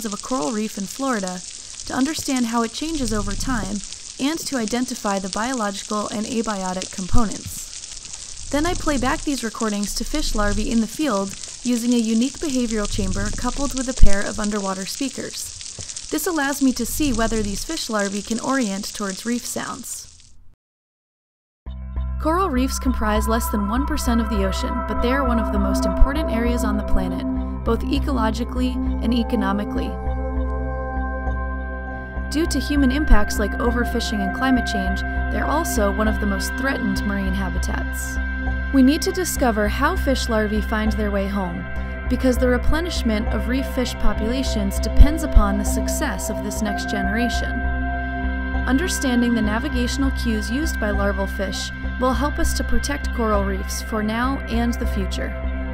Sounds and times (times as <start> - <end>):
Speech: 0.0 - 7.7, 8.5 - 15.5, 16.1 - 20.1, 22.2 - 30.0, 32.3 - 38.2, 38.8 - 47.6, 48.7 - 55.4
Music: 21.7 - 55.7.